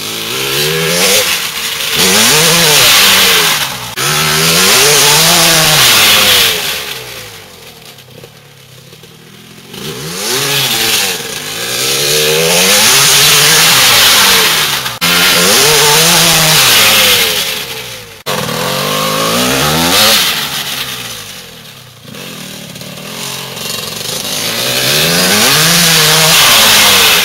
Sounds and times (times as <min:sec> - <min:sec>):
Accelerating, revving, vroom: 0:00.0 - 0:01.4, 0:02.0 - 0:07.0, 0:09.8 - 0:17.6, 0:18.4 - 0:20.8, 0:24.3 - 0:27.2
Vehicle: 0:00.0 - 0:27.2.